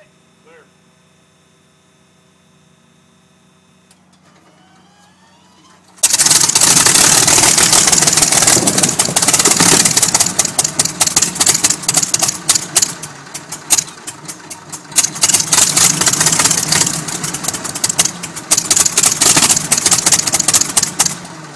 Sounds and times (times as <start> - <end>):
Engine: 0.0 - 21.5
Vehicle: 3.1 - 21.5.